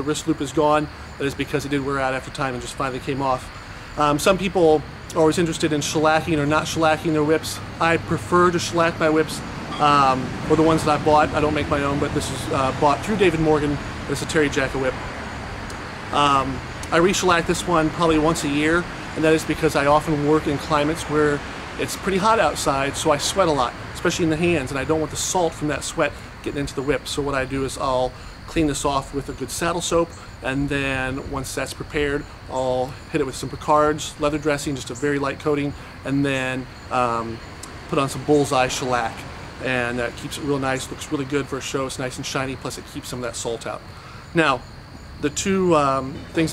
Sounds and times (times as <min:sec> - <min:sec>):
Speech: 0:00.0 - 0:15.0, 0:16.2 - 0:44.6, 0:45.2 - 0:46.5.